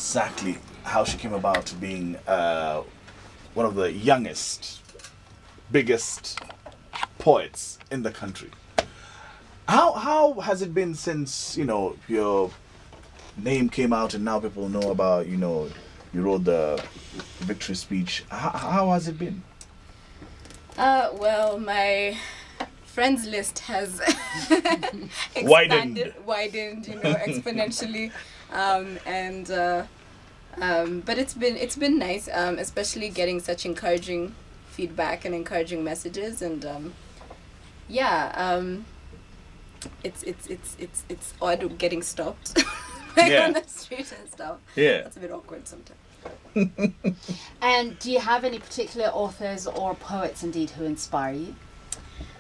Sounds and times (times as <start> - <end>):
Male speech, man speaking: 0.0 - 2.9, 3.6 - 4.9, 5.7 - 6.5, 7.2 - 8.6, 9.7 - 12.6, 13.4 - 19.5, 25.4 - 26.2, 26.9 - 28.0, 43.2 - 43.6, 44.8 - 45.1
Conversation: 0.0 - 52.4
Female speech, woman speaking: 20.8 - 29.9, 30.6 - 37.0, 37.9 - 38.9, 39.9 - 46.0, 47.6 - 51.6.